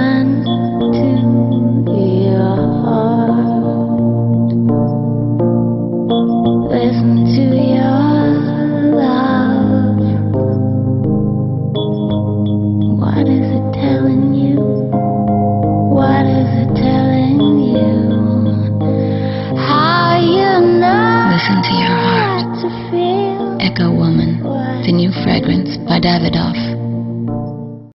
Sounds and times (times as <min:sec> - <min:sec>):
Music: 0:00.0 - 0:27.9
Speech: 0:20.1 - 0:26.8.